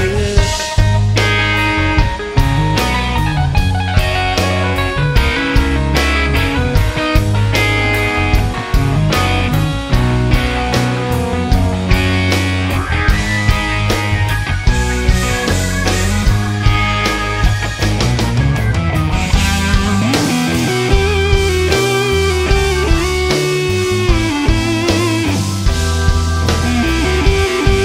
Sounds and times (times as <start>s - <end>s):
Progressive rock: 0.0s - 27.8s.